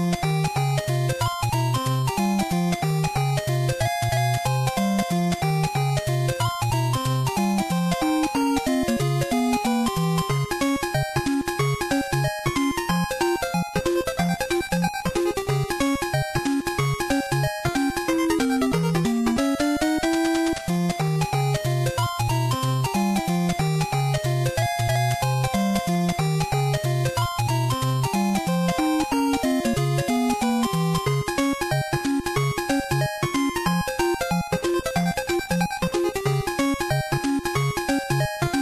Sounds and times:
Video game music: 0:00.0 - 0:38.6.

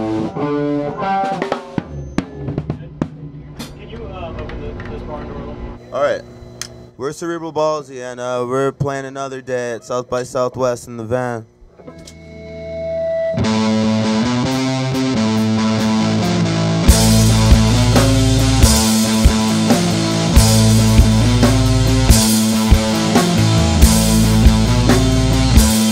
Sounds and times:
Drum kit: 0:00.0 - 0:05.2, 0:13.4 - 0:25.9.

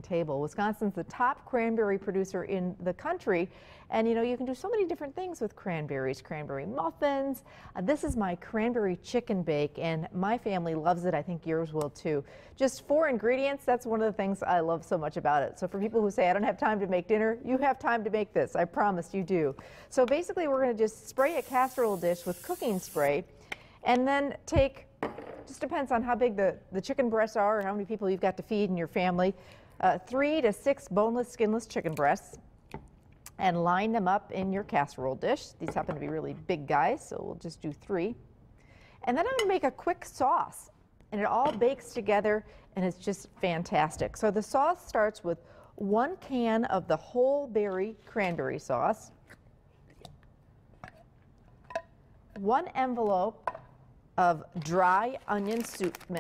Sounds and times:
Speech: 0:00.0 - 0:23.2, 0:25.5 - 0:32.4, 0:33.3 - 0:38.2, 0:39.1 - 0:49.1, 0:52.4 - 0:53.4, 0:54.2 - 0:56.2.

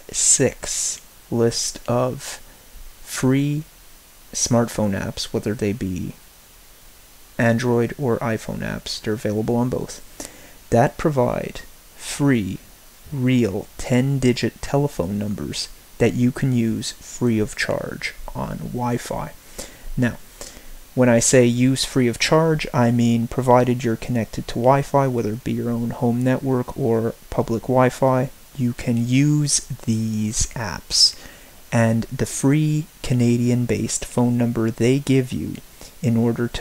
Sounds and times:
Speech: 0:00.0 - 0:02.4, 0:03.1 - 0:03.7, 0:04.4 - 0:06.2, 0:07.4 - 0:10.0, 0:10.7 - 0:19.4, 0:20.0 - 0:20.2, 0:21.0 - 0:36.6.

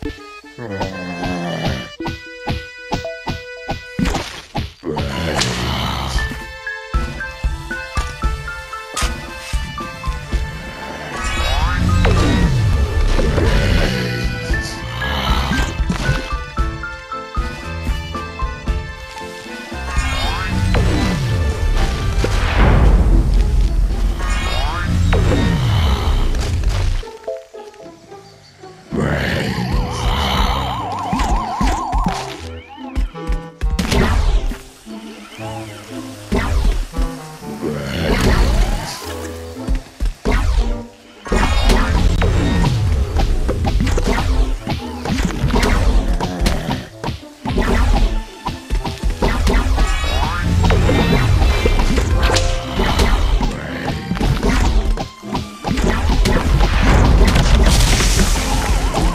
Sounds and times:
Music: 0:00.0 - 0:59.1.

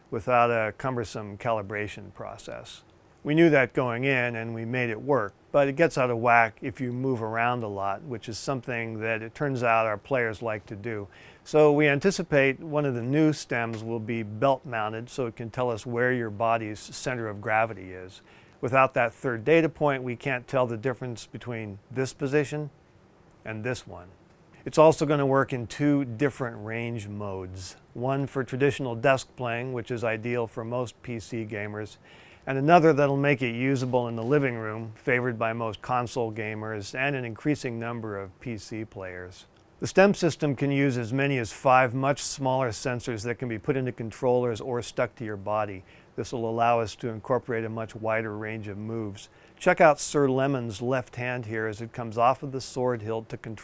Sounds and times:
Speech: 0:00.0 - 0:22.8, 0:23.4 - 0:53.6.

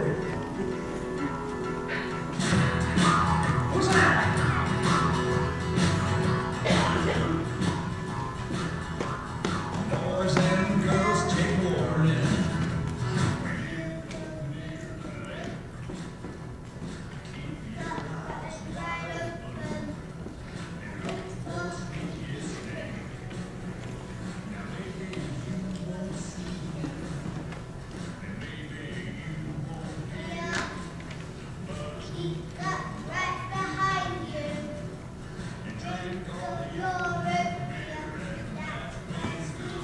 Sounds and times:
Inside, large room or hall: 0:00.0 - 0:39.8
Music: 0:00.0 - 0:39.8
Speech: 0:03.8 - 0:04.4, 0:09.9 - 0:12.4, 0:17.3 - 0:20.0.

